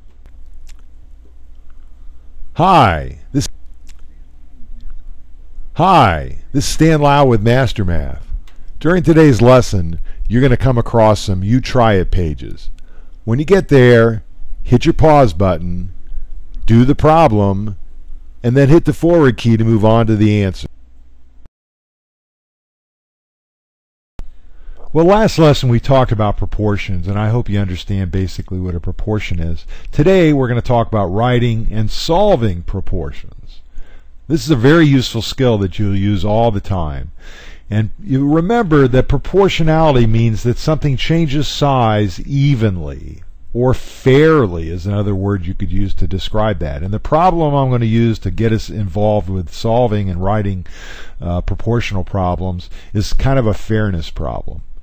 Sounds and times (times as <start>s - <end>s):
Speech: 2.6s - 3.6s, 5.8s - 16.0s, 16.6s - 17.8s, 18.4s - 20.7s, 24.9s - 33.6s, 34.3s - 54.7s.